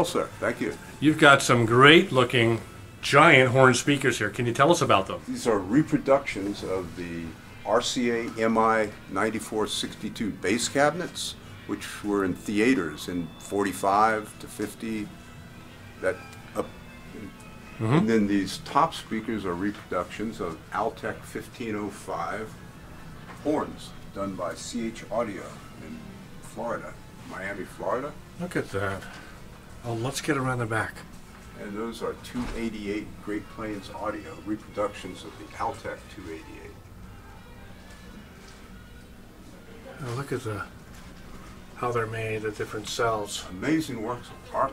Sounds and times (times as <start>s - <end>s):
Speech: 0.0s - 15.1s, 16.0s - 22.5s, 29.8s - 31.0s, 31.6s - 36.7s, 41.8s - 44.7s.